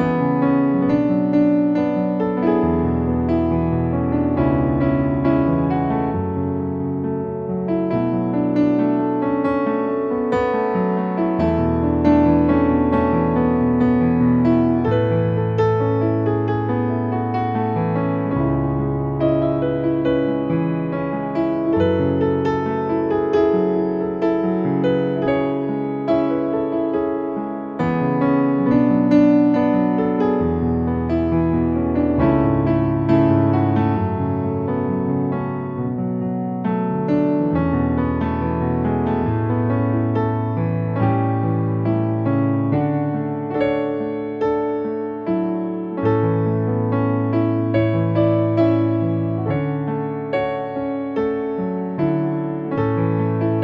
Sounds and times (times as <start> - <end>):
Music: 0.0 - 53.6.